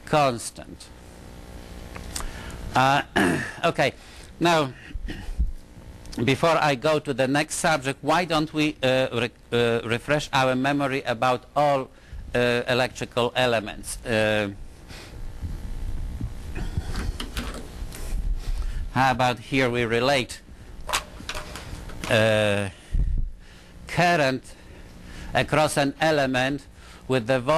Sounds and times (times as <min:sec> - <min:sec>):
Speech: 0:00.0 - 0:00.9, 0:02.8 - 0:04.8, 0:06.2 - 0:14.6, 0:19.0 - 0:20.4, 0:22.1 - 0:22.8, 0:23.9 - 0:24.6, 0:25.4 - 0:27.5.